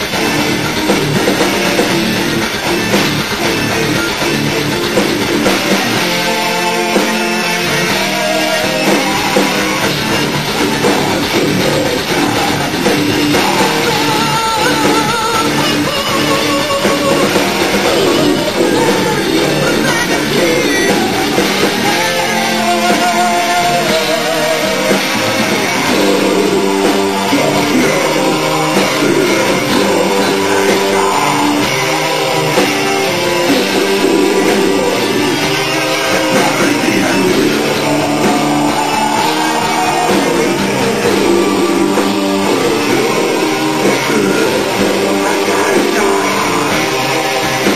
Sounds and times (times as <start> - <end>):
Guitar: 0.0 - 47.7
Heavy metal: 0.0 - 47.7.